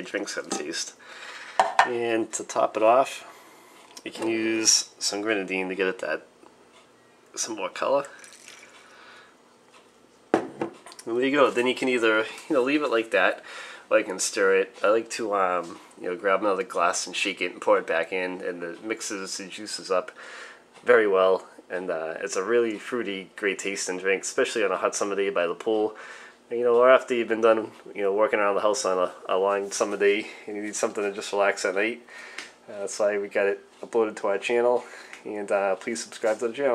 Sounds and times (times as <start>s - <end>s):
Speech: 0.0s - 1.0s, 1.8s - 3.3s, 4.0s - 6.3s, 7.3s - 8.2s, 11.0s - 20.2s, 20.8s - 32.1s, 32.7s - 36.7s
Inside, small room: 0.0s - 36.7s.